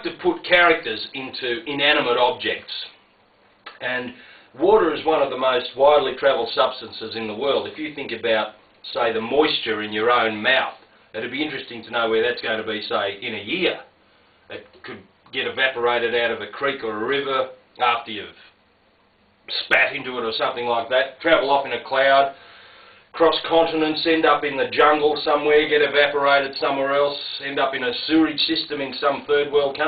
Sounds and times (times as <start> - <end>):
Speech: 0.0 - 3.0, 3.7 - 13.9, 14.5 - 18.5, 19.5 - 22.4, 23.1 - 29.8.